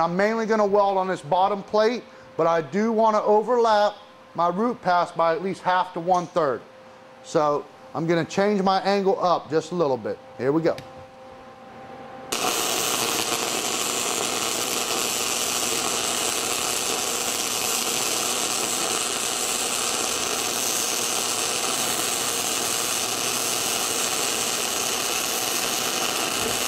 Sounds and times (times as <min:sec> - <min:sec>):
Speech: 0:00.0 - 0:06.6, 0:07.2 - 0:10.8.